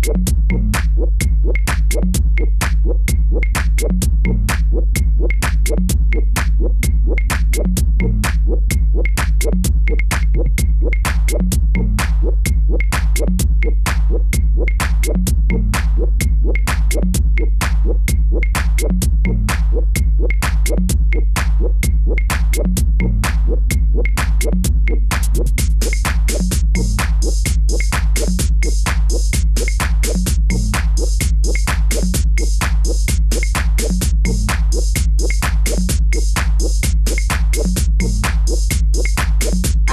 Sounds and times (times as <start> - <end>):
Drum machine: 0.0 - 39.9.